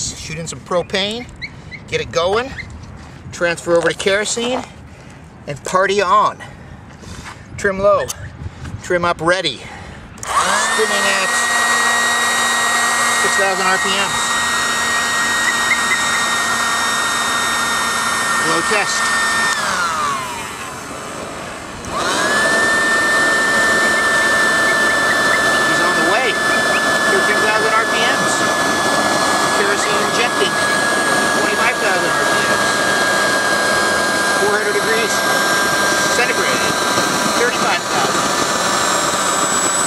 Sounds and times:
Speech: 0:00.0 - 0:01.3, 0:01.9 - 0:02.6, 0:03.4 - 0:04.7, 0:05.5 - 0:06.4, 0:07.6 - 0:08.2, 0:08.8 - 0:09.7, 0:10.8 - 0:11.4, 0:13.2 - 0:14.2, 0:18.4 - 0:19.1, 0:25.6 - 0:26.4, 0:27.1 - 0:28.4, 0:29.6 - 0:30.6, 0:31.4 - 0:32.6, 0:34.4 - 0:35.2, 0:36.1 - 0:36.8, 0:37.4 - 0:38.2
Jet engine: 0:10.2 - 0:39.8.

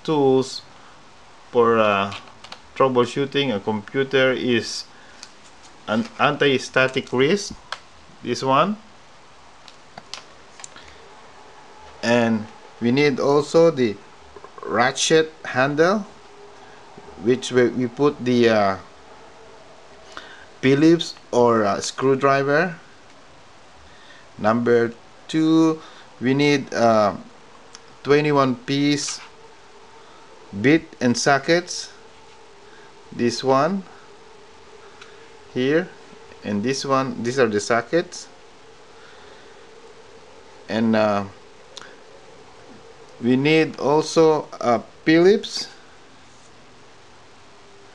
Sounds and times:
Speech: 0:00.0 - 0:00.7, 0:01.5 - 0:02.2, 0:02.8 - 0:04.9, 0:05.9 - 0:07.6, 0:08.2 - 0:08.9, 0:12.0 - 0:16.2, 0:17.2 - 0:18.9, 0:20.6 - 0:22.9, 0:24.4 - 0:27.3, 0:28.0 - 0:29.3, 0:30.5 - 0:32.0, 0:33.1 - 0:33.9, 0:35.5 - 0:38.3, 0:40.7 - 0:41.4, 0:43.2 - 0:45.8.

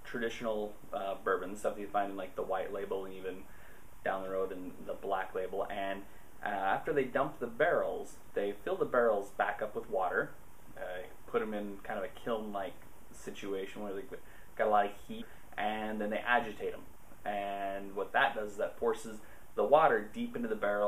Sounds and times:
Speech: 0:00.0 - 0:03.5, 0:04.1 - 0:20.8.

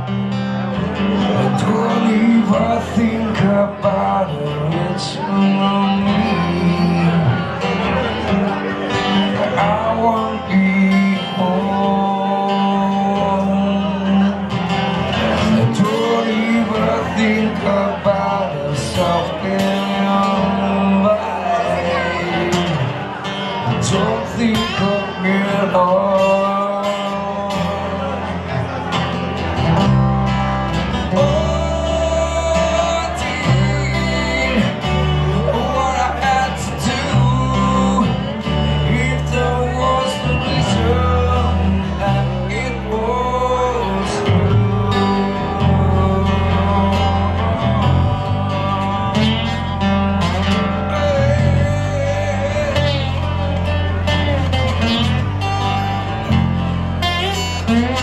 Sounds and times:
Music: 0:00.0 - 0:58.0.

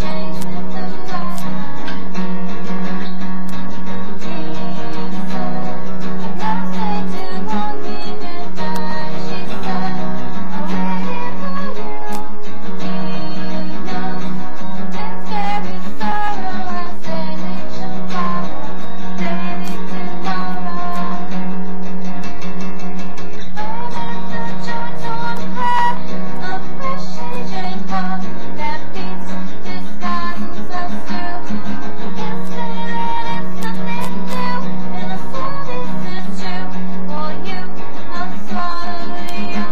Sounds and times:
Electric guitar: 0:00.0 - 0:39.7.

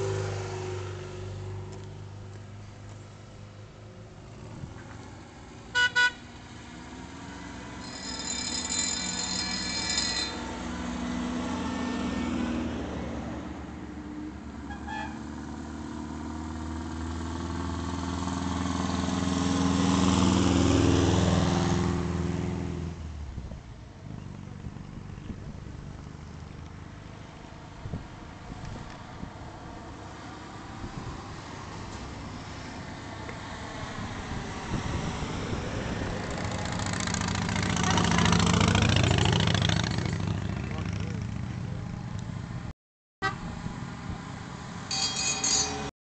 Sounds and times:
Car: 0:00.0 - 0:45.9.

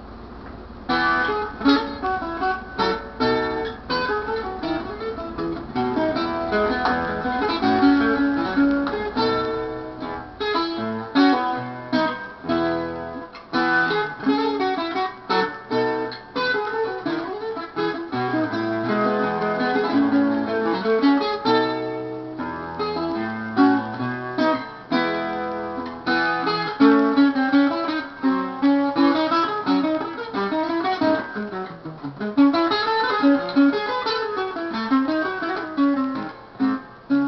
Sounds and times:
Acoustic guitar: 0:00.0 - 0:37.2
Strum: 0:00.0 - 0:37.2.

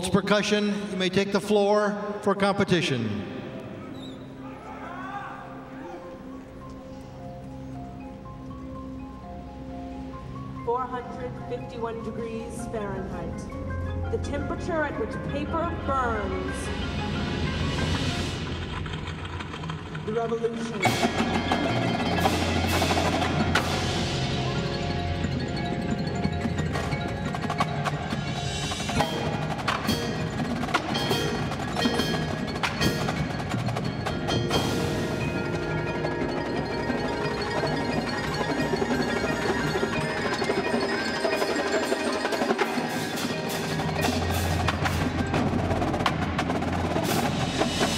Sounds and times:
Marimba, xylophone: 0:05.5 - 0:47.9
Glockenspiel: 0:20.8 - 0:47.9.

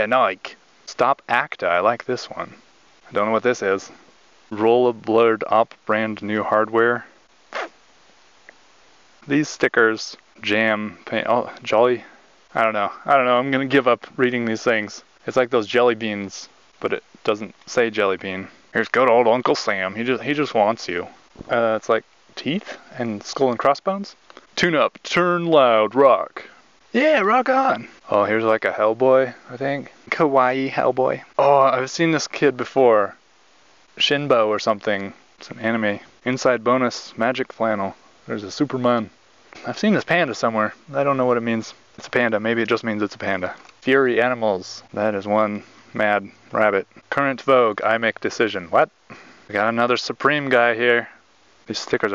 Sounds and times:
Speech: 0:00.0 - 0:07.7, 0:09.2 - 0:33.2, 0:34.0 - 0:52.1.

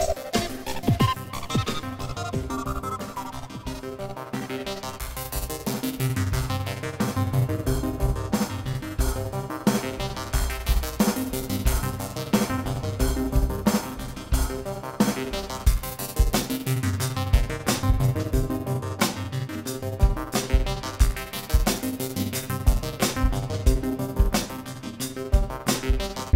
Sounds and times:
Music: 0:00.0 - 0:26.3.

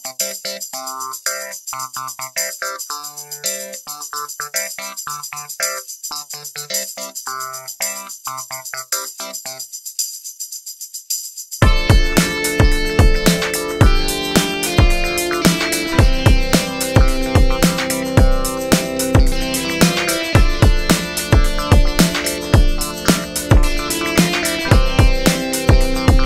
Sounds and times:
Music: 0:00.0 - 0:09.7, 0:11.6 - 0:26.2.

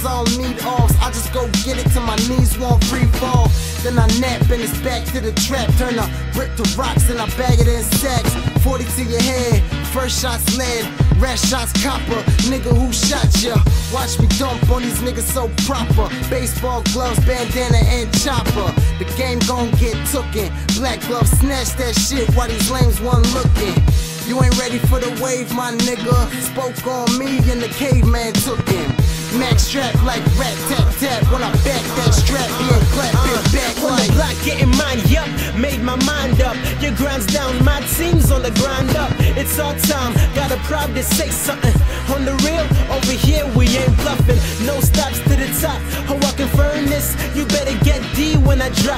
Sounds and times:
Music: 0:00.0 - 0:48.9.

